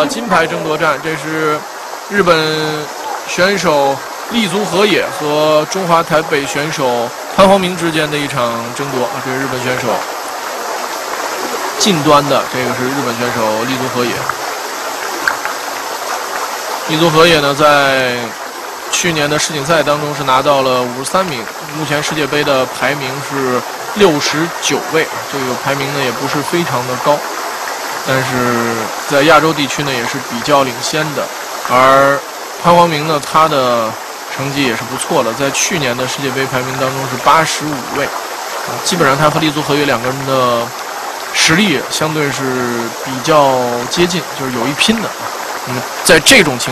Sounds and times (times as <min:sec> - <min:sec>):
Speech: 0:00.0 - 0:10.0, 0:11.8 - 0:14.4, 0:16.9 - 0:27.2, 0:28.1 - 0:38.1, 0:38.7 - 0:40.7, 0:41.4 - 0:46.7.